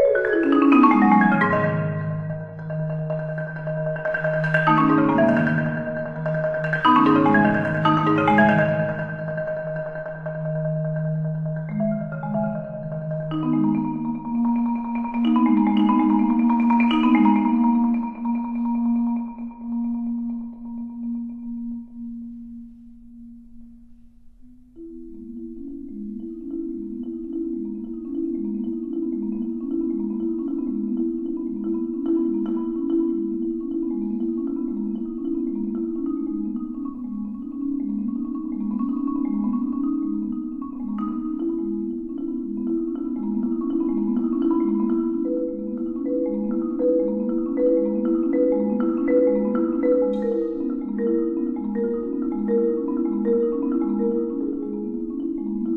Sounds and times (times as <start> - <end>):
Marimba, xylophone: 0.0 - 55.7.